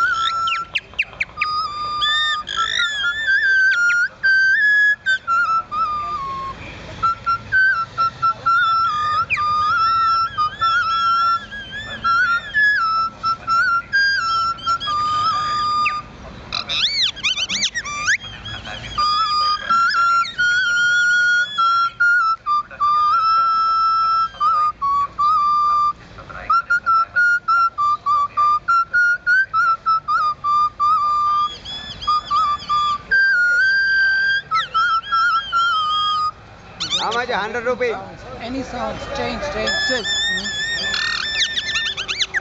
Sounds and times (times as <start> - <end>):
Music: 18.0 - 31.6.